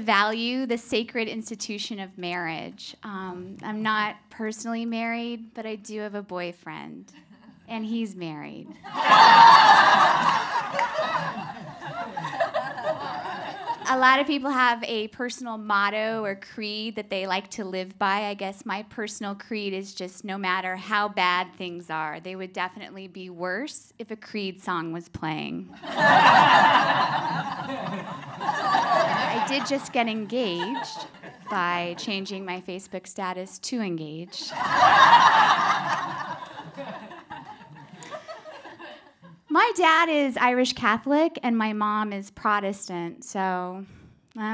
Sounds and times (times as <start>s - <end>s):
Speech: 0.0s - 7.1s, 7.7s - 8.8s, 13.8s - 25.7s, 29.2s - 34.5s, 39.5s - 44.5s
Laughter: 8.8s - 13.9s, 25.8s - 32.0s, 34.4s - 39.4s.